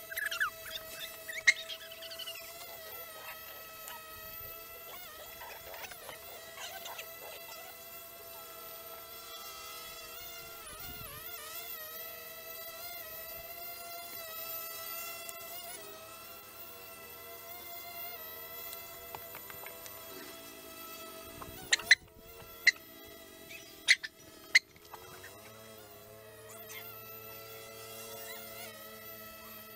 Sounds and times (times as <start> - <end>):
Outside, rural or natural: 0.0 - 29.7.